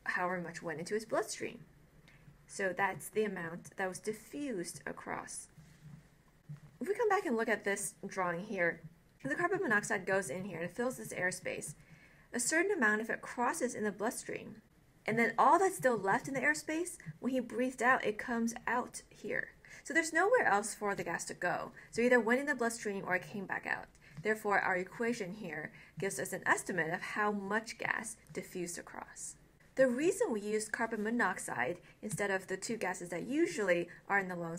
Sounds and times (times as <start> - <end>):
Narration, monologue: 0.0 - 34.5.